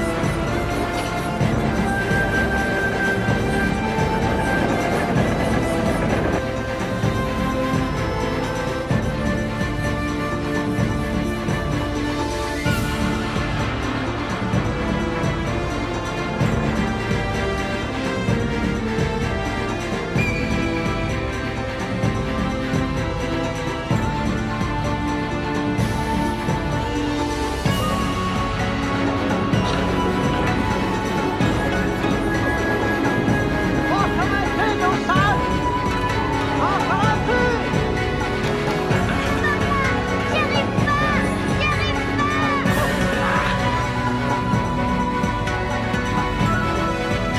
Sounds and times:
Music: 0:00.0 - 0:47.3
Speech: 0:33.9 - 0:35.5, 0:39.2 - 0:43.8.

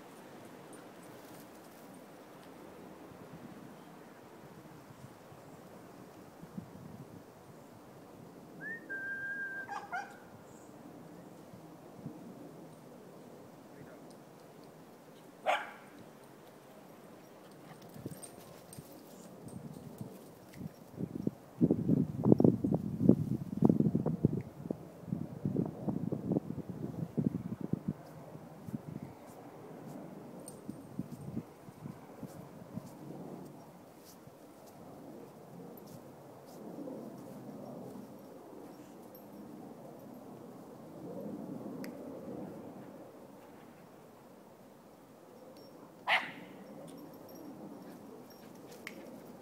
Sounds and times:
Wind noise (microphone): 0:06.4 - 0:07.3, 0:19.4 - 0:33.5.

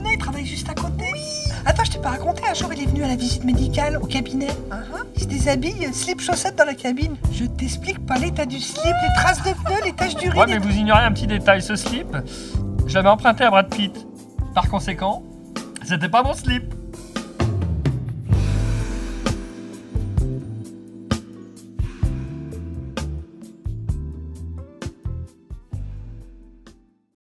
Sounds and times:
Music: 0:00.0 - 0:27.2.

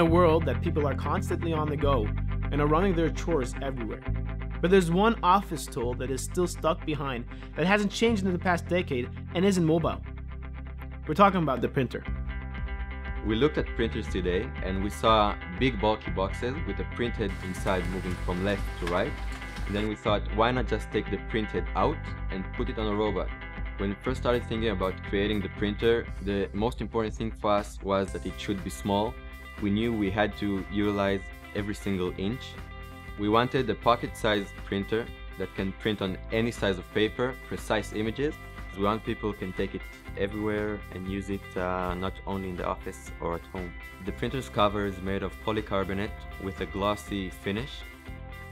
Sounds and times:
Speech: 0:00.0 - 0:04.0, 0:04.6 - 0:10.0, 0:11.1 - 0:12.1, 0:13.2 - 0:32.6, 0:33.2 - 0:47.9
Music: 0:00.0 - 0:48.5.

